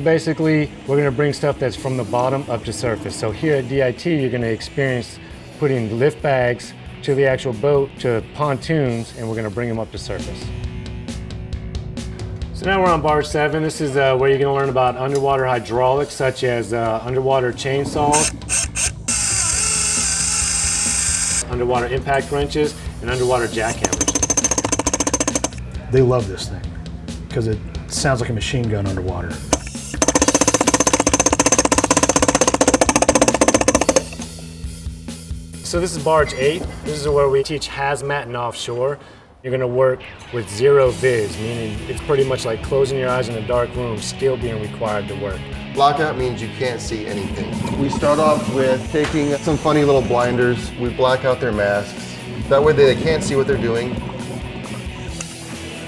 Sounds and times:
Speech: 0.0 - 10.5, 12.6 - 18.2, 21.4 - 23.8, 25.8 - 26.7, 27.3 - 29.4, 35.6 - 54.0
Music: 0.0 - 55.8
Dental drill, dentist's drill: 18.1 - 21.4, 23.6 - 25.6, 29.6 - 34.3, 48.9 - 50.3.

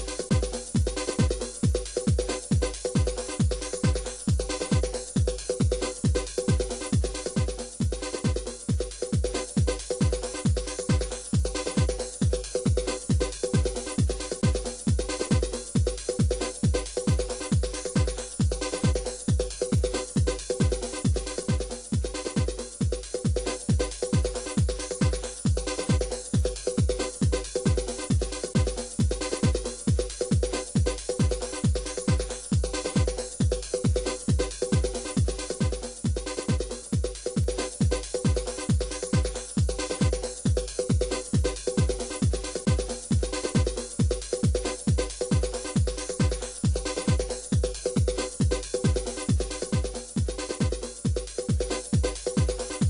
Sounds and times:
Background music: 0.0 - 52.8.

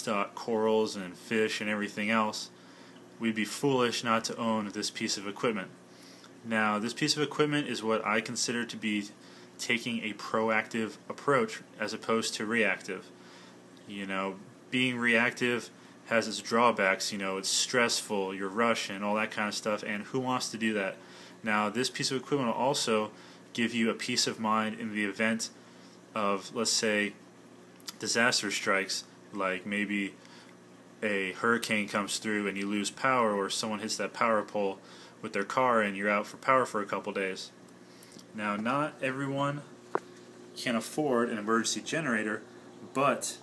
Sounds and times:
Speech: 0.0 - 2.6, 3.2 - 5.8, 6.4 - 13.1, 13.8 - 27.2, 27.9 - 30.2, 31.0 - 37.6, 38.3 - 39.7, 40.6 - 43.4.

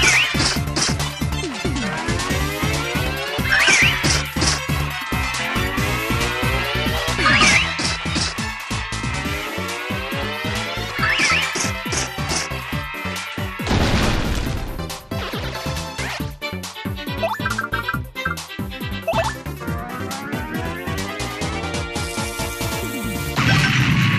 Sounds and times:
Music: 0.0 - 24.1.

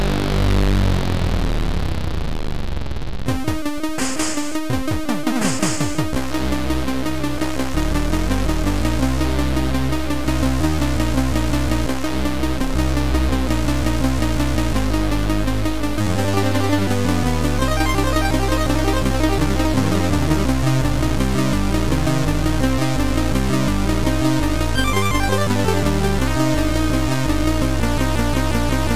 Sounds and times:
Soundtrack music: 3.3 - 28.9.

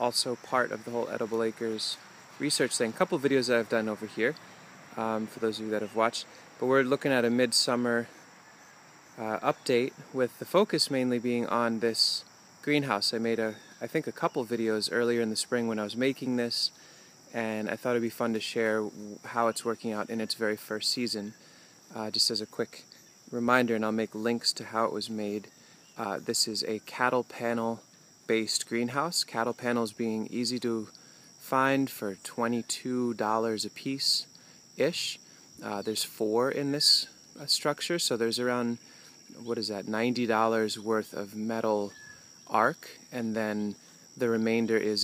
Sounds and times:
Speech: 0.0 - 4.4, 5.0 - 8.2, 9.2 - 45.0.

